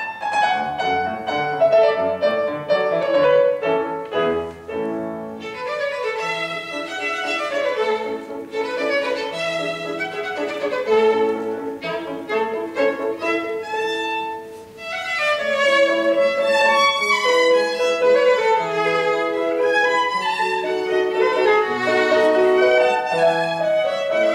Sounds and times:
Violin, fiddle: 0:00.0 - 0:24.3.

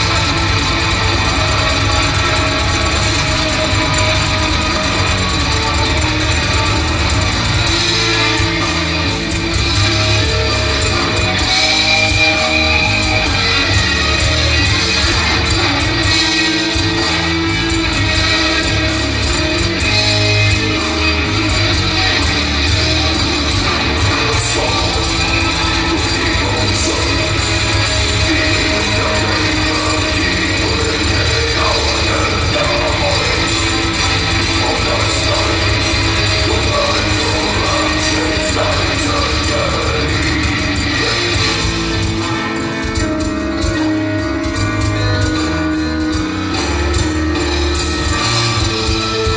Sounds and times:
Music: 0:00.0 - 0:49.3.

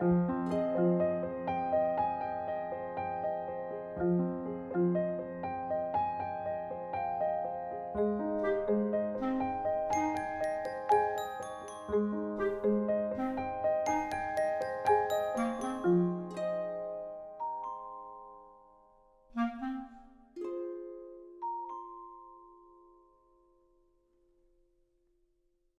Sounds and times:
Music: 0:00.0 - 0:25.5.

